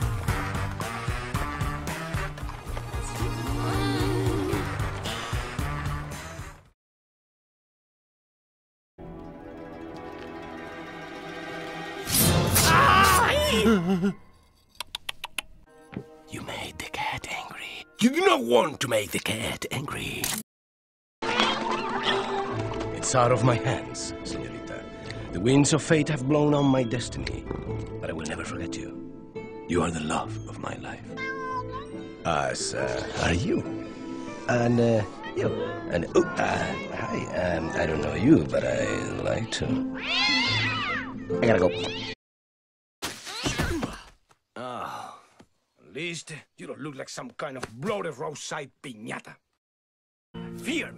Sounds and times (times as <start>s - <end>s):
Music: 0.0s - 6.8s, 9.0s - 14.7s, 15.7s - 19.4s, 21.2s - 42.1s, 50.4s - 50.9s.